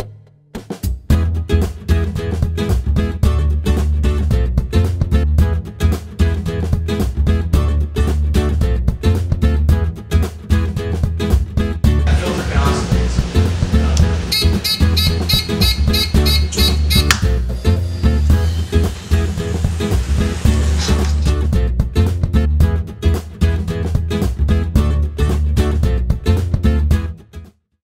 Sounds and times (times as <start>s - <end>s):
Music: 0.0s - 27.8s
Vehicle: 12.1s - 21.5s.